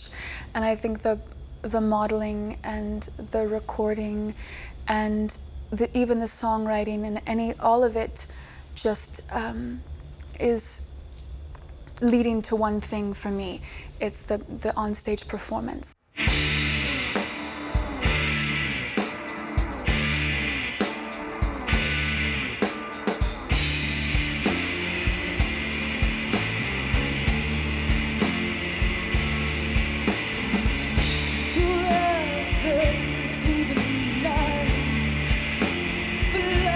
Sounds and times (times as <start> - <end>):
Speech: 0.0 - 10.8, 12.0 - 16.0
Music: 16.1 - 36.7.